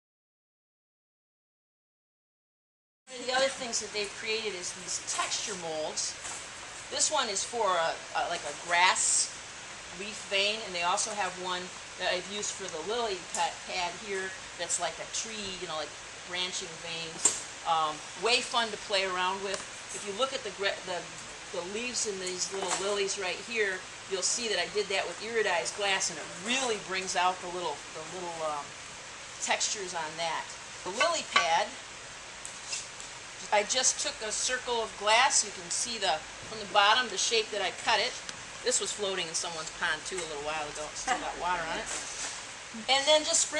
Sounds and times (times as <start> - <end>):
Speech: 3.1 - 6.2, 6.9 - 9.3, 10.0 - 28.7, 29.4 - 31.8, 33.4 - 42.0, 42.8 - 43.5.